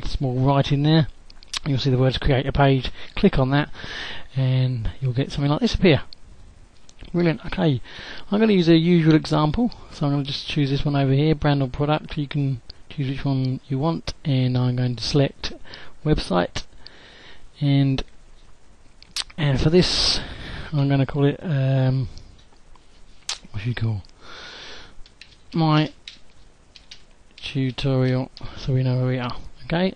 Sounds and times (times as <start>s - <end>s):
Speech: 0.0s - 3.7s, 4.3s - 6.1s, 7.1s - 16.7s, 17.6s - 18.1s, 19.2s - 22.1s, 23.3s - 24.1s, 25.6s - 26.0s, 27.4s - 29.9s.